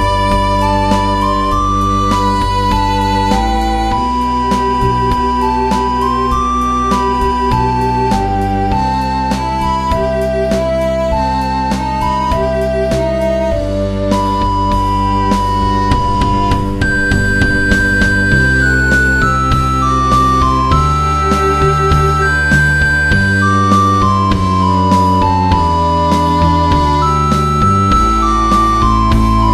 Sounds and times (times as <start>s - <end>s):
Musical instrument: 0.0s - 29.5s.